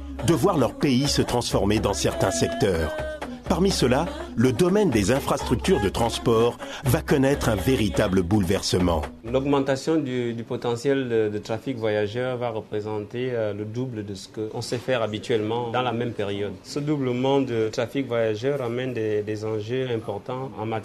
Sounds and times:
Music: 0.0 - 16.8
Speech: 0.2 - 20.8.

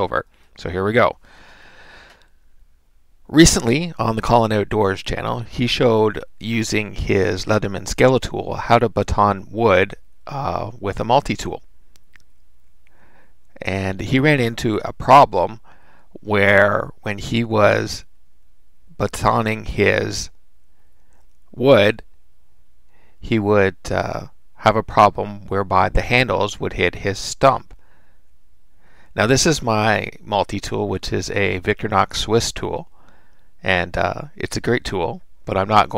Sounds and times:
Speech: 0.0 - 1.2, 3.3 - 11.6, 13.6 - 15.6, 16.2 - 18.1, 19.0 - 20.4, 21.5 - 22.1, 23.2 - 27.8, 29.2 - 32.9, 33.6 - 35.9.

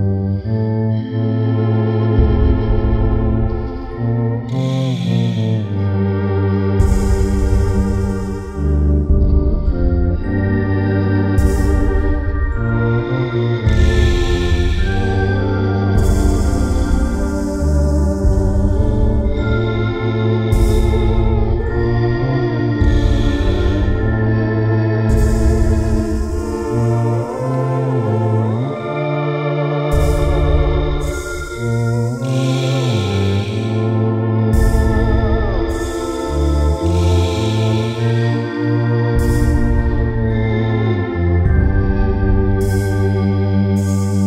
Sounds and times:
Musical instrument: 0.0 - 6.0, 6.8 - 44.2
Chorus effect: 0.0 - 44.2.

